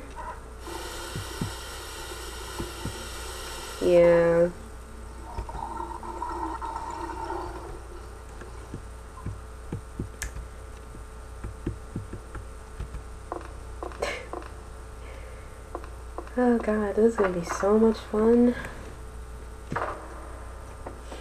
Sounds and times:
Speech: 3.8s - 4.6s, 16.4s - 18.7s.

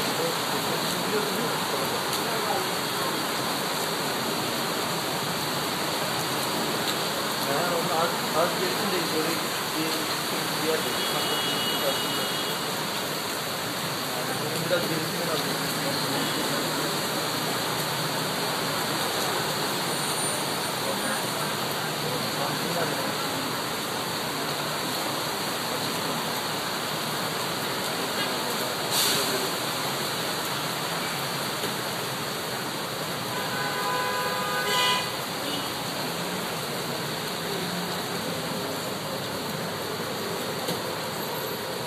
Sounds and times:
Rain: 0.0s - 41.8s.

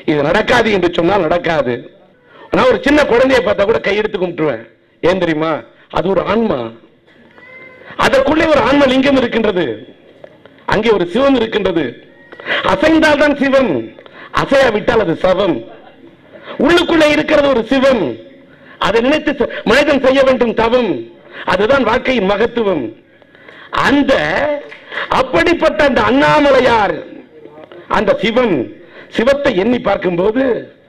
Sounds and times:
Male speech, man speaking: 0.0s - 6.9s, 8.0s - 9.9s, 10.7s - 12.0s, 12.6s - 23.0s, 23.8s - 30.8s.

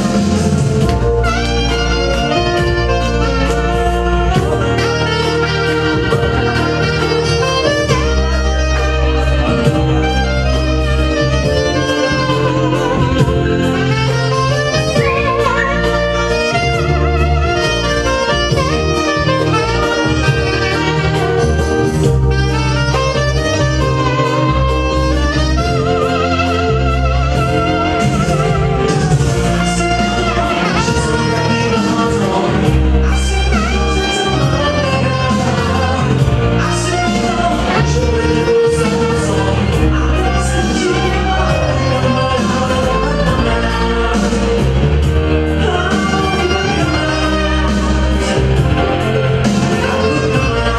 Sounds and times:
Brass instrument: 0.0s - 50.7s
Jazz: 0.0s - 50.7s
Saxophone: 0.0s - 50.7s.

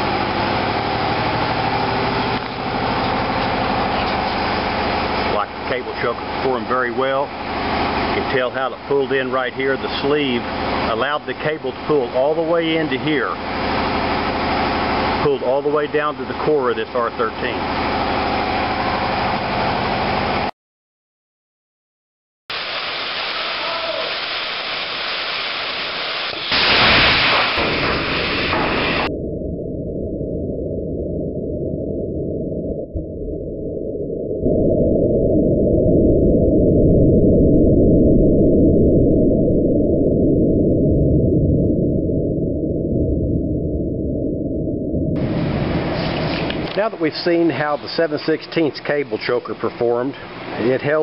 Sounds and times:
Speech: 5.3s - 7.3s, 8.1s - 13.4s, 15.2s - 17.6s, 46.8s - 51.0s.

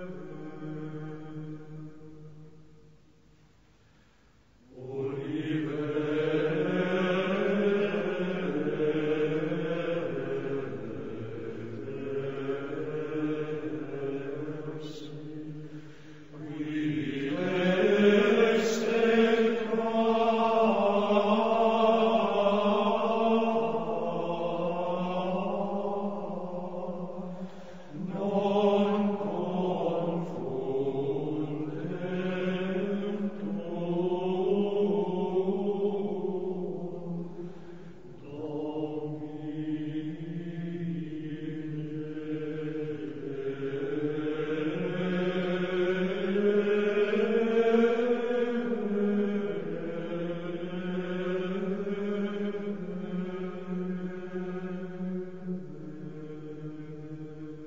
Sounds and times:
Chant: 0.0s - 3.0s, 4.6s - 57.6s.

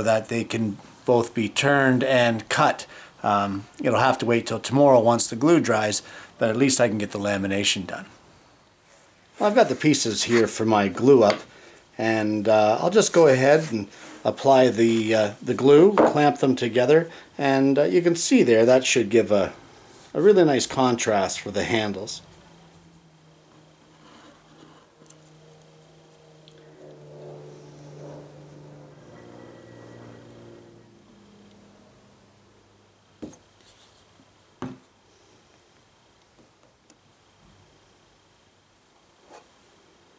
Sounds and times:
Speech: 0.0s - 8.1s, 9.4s - 22.3s.

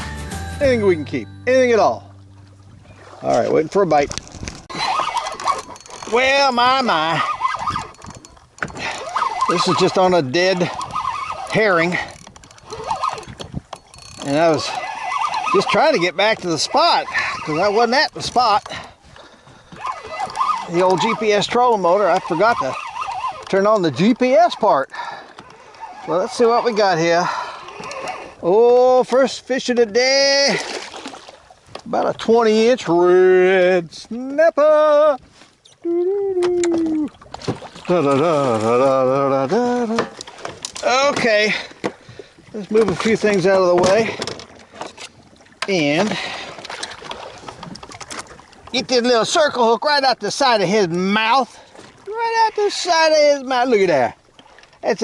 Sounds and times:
Outside, rural or natural: 0.0s - 55.0s
Speech: 0.6s - 2.0s, 3.2s - 4.1s, 6.1s - 7.3s, 9.5s - 10.7s, 14.2s - 14.7s, 15.6s - 18.6s, 20.7s - 22.8s, 23.5s - 24.9s, 26.1s - 27.3s, 28.4s - 30.6s, 31.9s - 35.2s, 37.9s - 40.1s, 40.8s - 41.6s, 42.6s - 44.2s, 45.7s - 46.2s, 48.8s - 54.2s, 54.8s - 55.0s.

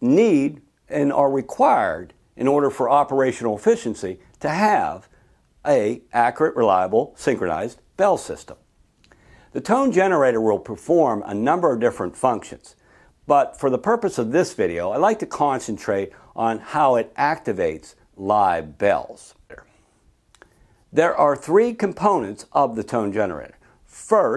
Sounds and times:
Speech: 0.0s - 8.6s, 9.5s - 19.8s, 20.9s - 24.3s.

